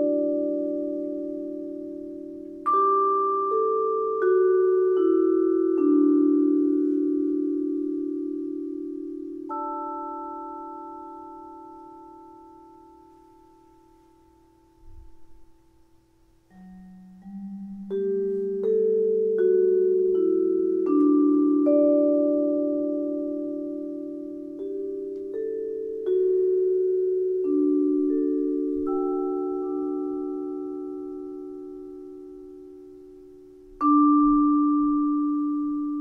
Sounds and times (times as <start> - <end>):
Music: 0.0 - 36.0.